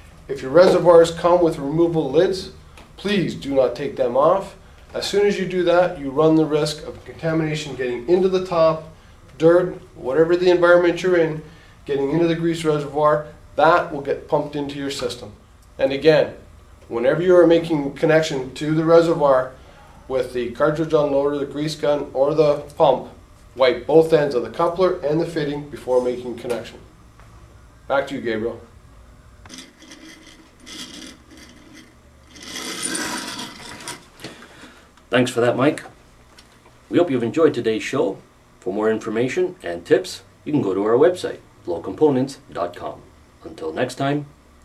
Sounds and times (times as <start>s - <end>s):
Speech: 0.3s - 26.9s, 27.9s - 28.7s, 35.1s - 36.0s, 36.9s - 44.4s.